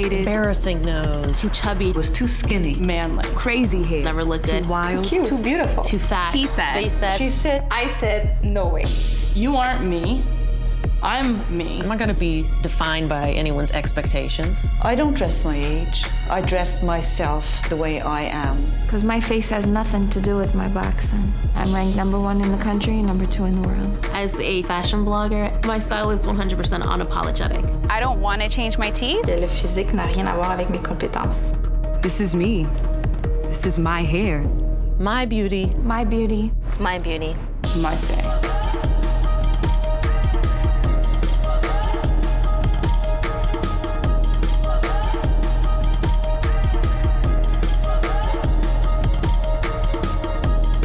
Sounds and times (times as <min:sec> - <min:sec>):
Music: 0:00.0 - 0:50.8
Speech: 0:00.1 - 0:08.9.